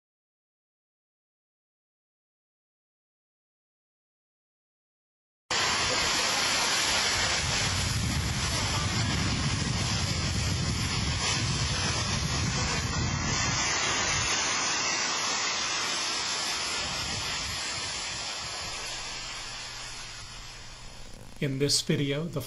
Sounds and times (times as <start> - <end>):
Fire: 5.5 - 21.6
Wind noise (microphone): 7.1 - 14.5, 16.8 - 18.9.